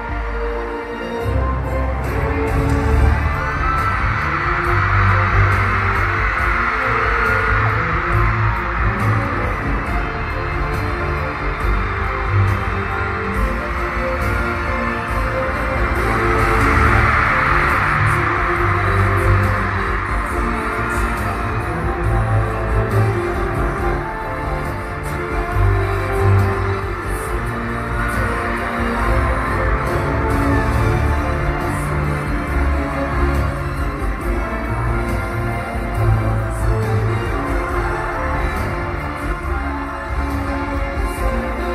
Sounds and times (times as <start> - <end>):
Music: 0.0 - 41.7.